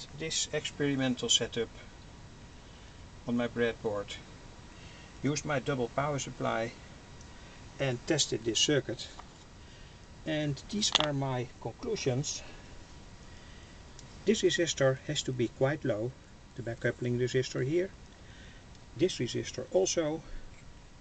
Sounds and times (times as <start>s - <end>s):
Speech: 0.0s - 1.9s, 3.3s - 4.3s, 5.2s - 6.8s, 7.8s - 9.2s, 10.3s - 12.6s, 14.2s - 18.0s, 19.0s - 20.4s.